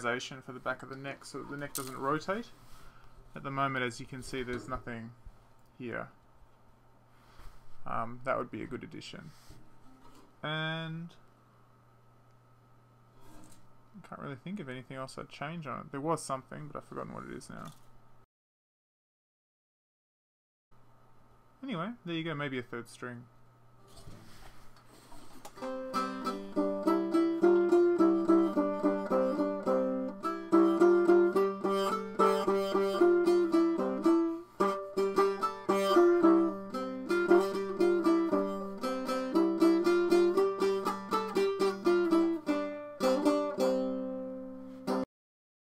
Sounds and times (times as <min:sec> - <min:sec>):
Plucked string instrument: 0:25.5 - 0:45.1.